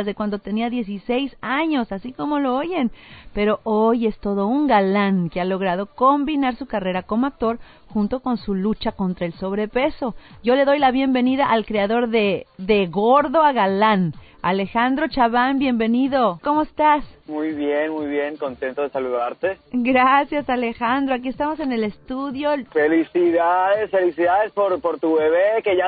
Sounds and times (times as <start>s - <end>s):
Music: 0.0s - 25.8s
Speech: 0.0s - 25.8s
Radio: 17.3s - 19.6s, 21.6s - 25.8s.